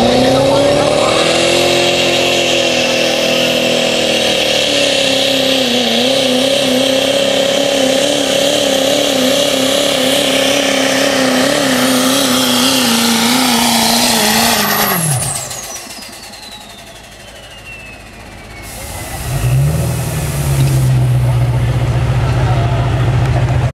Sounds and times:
Speech: 0.0 - 1.5, 21.2 - 23.7.

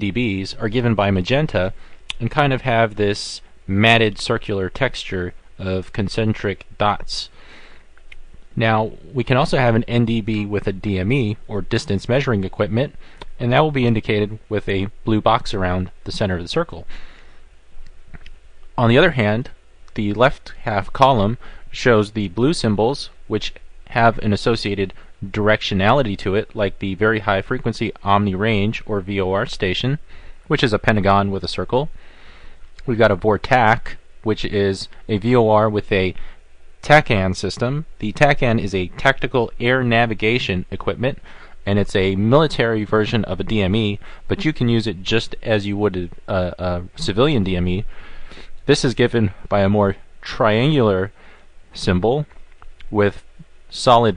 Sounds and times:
Speech: 0.0 - 7.4, 8.6 - 16.9, 18.8 - 32.0, 32.8 - 36.2, 36.8 - 47.9, 48.6 - 51.2, 51.8 - 54.1.

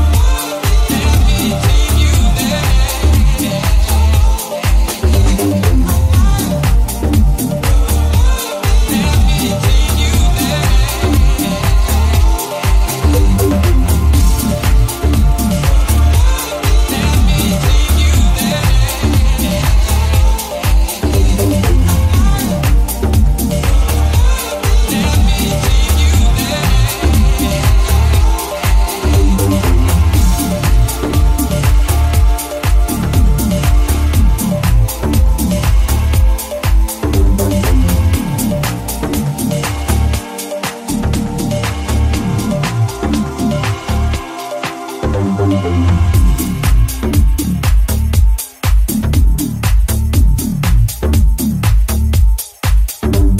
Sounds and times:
Disco: 0.0 - 53.3.

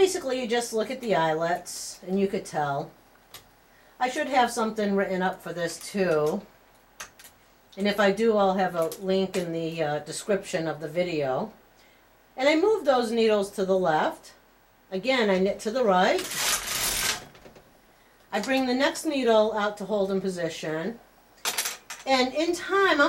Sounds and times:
Speech: 0.0 - 3.0, 4.0 - 6.5, 7.8 - 11.6, 12.4 - 16.3, 18.3 - 21.0, 22.1 - 23.0.

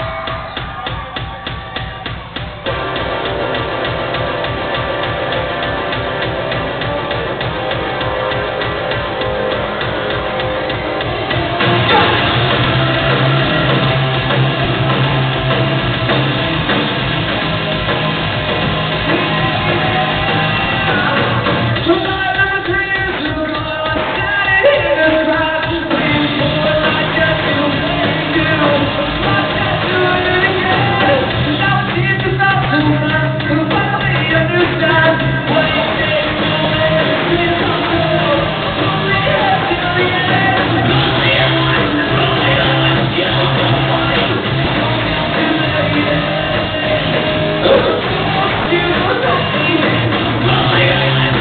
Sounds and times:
Music: 0.0 - 51.4.

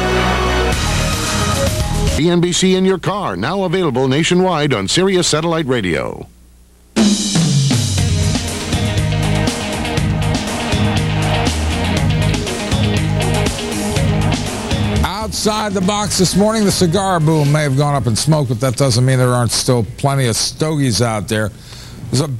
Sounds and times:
Music: 0.0 - 2.4, 7.0 - 18.7
Speech: 2.2 - 6.3, 15.0 - 22.3.

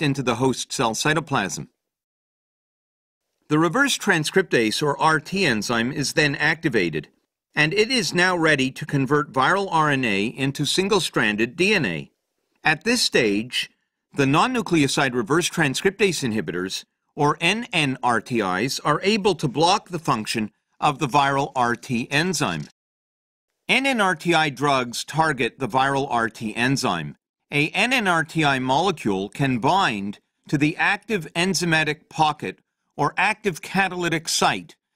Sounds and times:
Speech: 0.0 - 1.8, 3.5 - 22.8, 23.7 - 34.8.

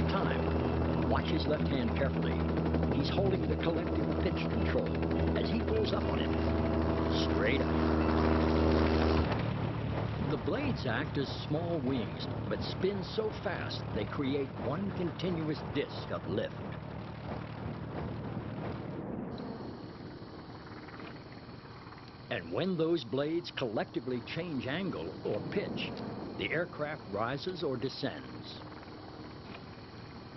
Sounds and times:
Speech: 0.0 - 0.5, 1.1 - 6.4, 7.1 - 7.7, 10.2 - 16.6, 22.3 - 28.6.

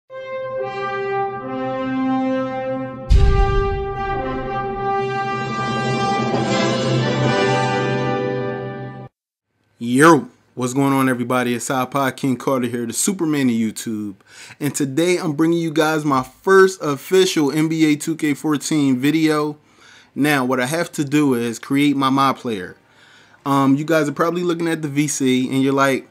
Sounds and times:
Brass instrument: 0.1 - 9.1
Speech: 9.8 - 19.6, 20.2 - 22.8, 23.4 - 26.1.

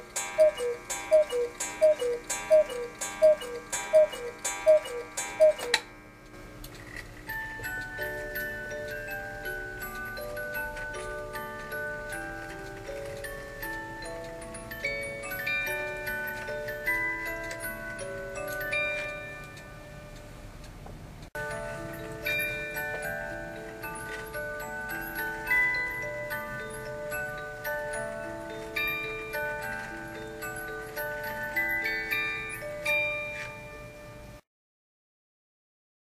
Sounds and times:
Music: 6.6 - 20.4, 21.4 - 34.4.

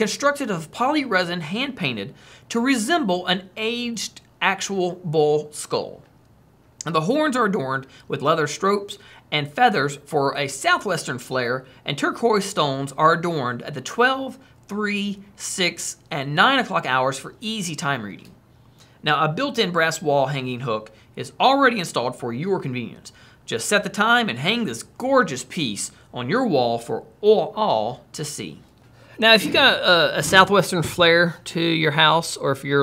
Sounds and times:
Speech: 0.0 - 6.1, 6.8 - 18.4, 19.0 - 32.8.

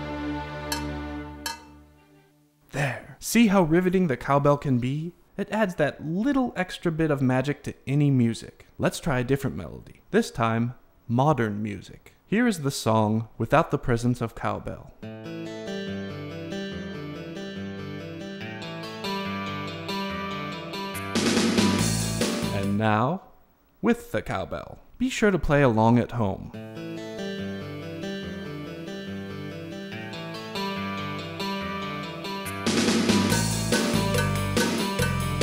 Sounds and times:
Speech: 2.7 - 15.0, 22.5 - 26.6.

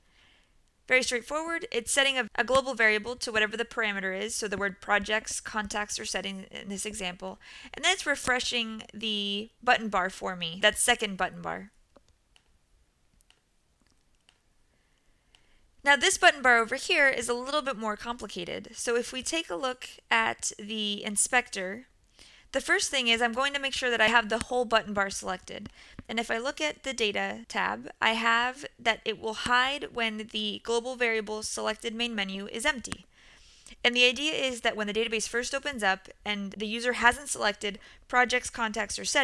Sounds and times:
Speech: 0.9 - 11.7, 15.8 - 21.9, 22.6 - 33.0, 33.8 - 39.2
Clicking: 11.9 - 12.5, 13.1 - 14.4.

